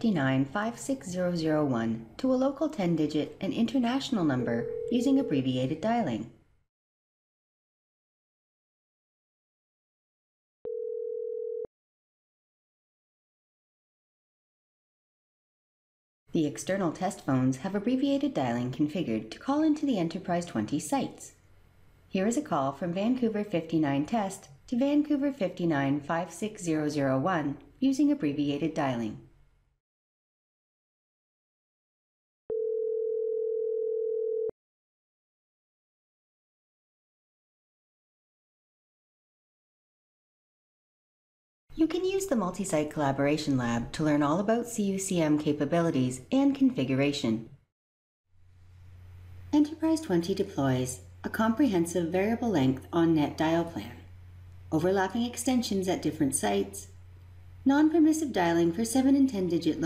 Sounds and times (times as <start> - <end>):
Dial tone: 4.4 - 5.4, 10.7 - 11.7, 32.5 - 34.6.